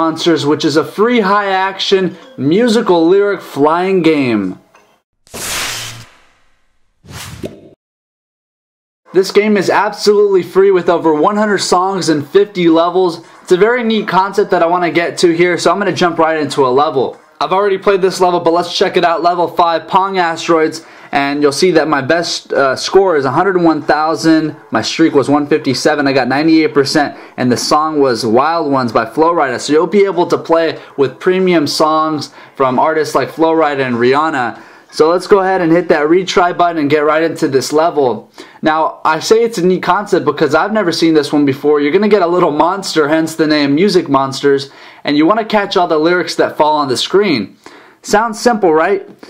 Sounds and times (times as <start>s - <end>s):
Speech: 0.0s - 4.6s, 9.1s - 49.2s.